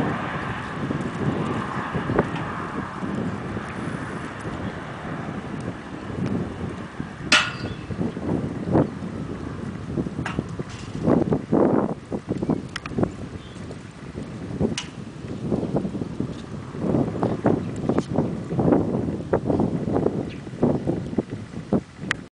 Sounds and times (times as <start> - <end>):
Clip-clop: 0.0 - 22.3.